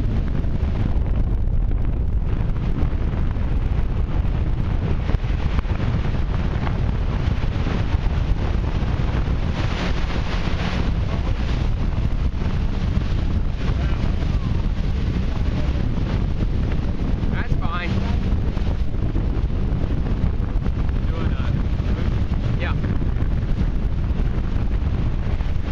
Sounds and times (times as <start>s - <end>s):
Motorboat, speedboat: 0.0s - 25.7s
Speech: 17.3s - 18.2s, 21.0s - 21.6s, 22.6s - 22.9s.